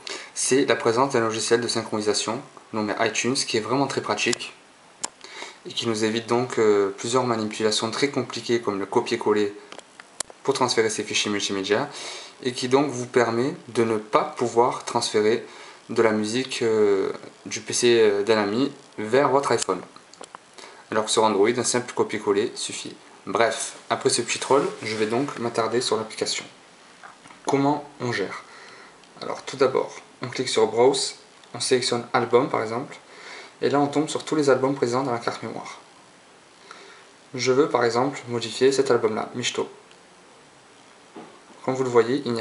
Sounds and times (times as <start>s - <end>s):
Speech: 0.4s - 4.6s, 5.6s - 9.7s, 10.4s - 20.0s, 20.9s - 26.6s, 27.5s - 28.5s, 29.2s - 35.9s, 37.3s - 39.8s, 41.6s - 42.4s.